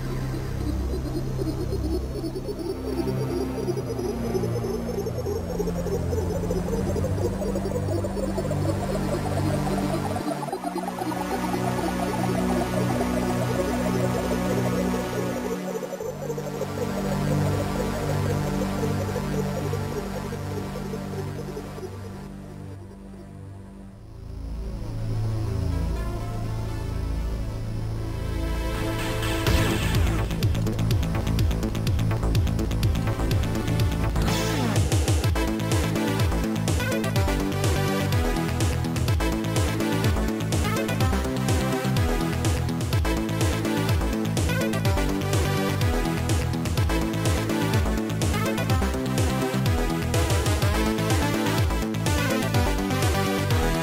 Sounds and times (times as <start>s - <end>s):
Music: 0.0s - 53.8s.